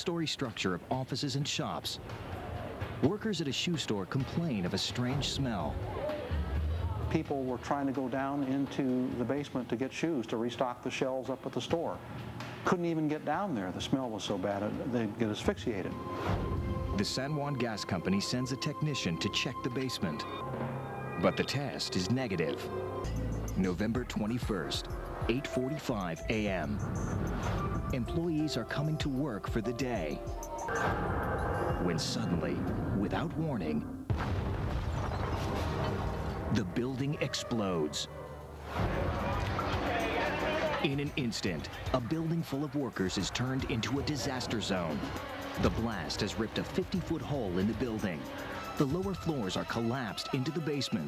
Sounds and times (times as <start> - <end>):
Speech: 0.0 - 2.0, 3.0 - 6.1, 7.1 - 12.0, 12.7 - 16.0, 17.0 - 20.4, 21.2 - 22.7, 23.6 - 26.8, 28.0 - 30.2, 31.8 - 33.9, 36.5 - 38.1, 39.9 - 51.0
Music: 4.9 - 9.5, 14.8 - 51.0.